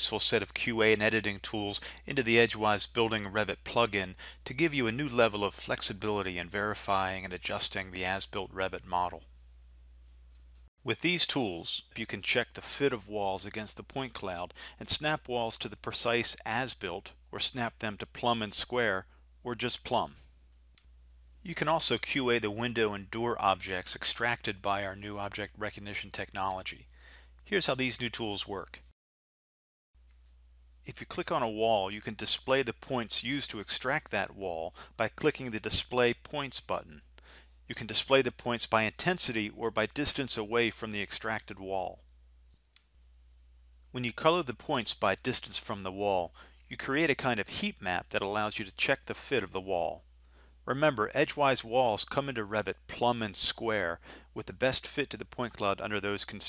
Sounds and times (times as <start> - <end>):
Speech: 0.0 - 9.2, 10.8 - 20.2, 21.4 - 28.9, 30.9 - 37.0, 37.7 - 42.0, 43.9 - 50.0, 50.7 - 56.4.